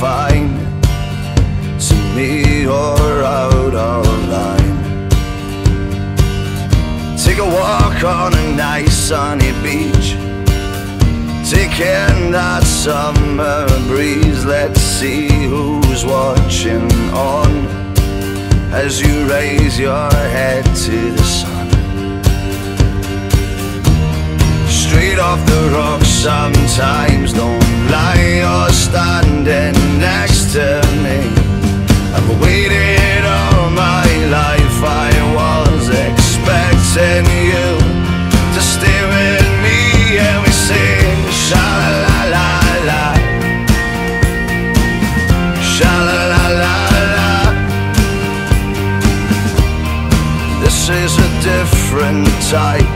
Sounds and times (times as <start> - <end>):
Progressive rock: 0.0 - 52.9
Punk rock: 0.0 - 52.9
Rock and roll: 0.0 - 52.9.